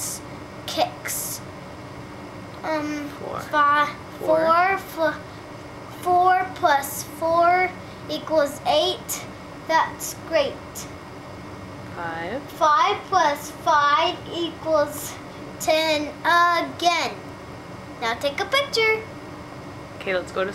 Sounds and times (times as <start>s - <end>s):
Speech: 3.2s - 3.5s, 4.2s - 4.7s.